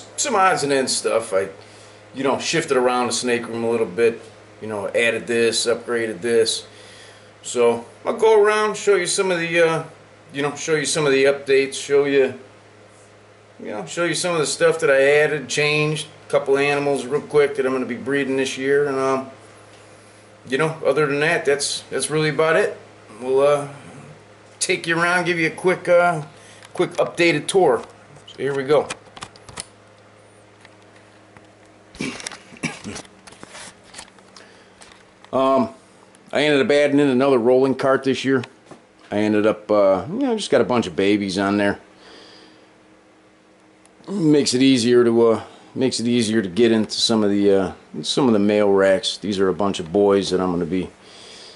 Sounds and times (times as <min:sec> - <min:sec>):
Speech: 0:00.0 - 0:01.6, 0:02.2 - 0:06.7, 0:07.4 - 0:12.5, 0:13.6 - 0:19.4, 0:20.5 - 0:23.9, 0:24.6 - 0:29.0, 0:35.3 - 0:41.8, 0:44.1 - 0:51.0.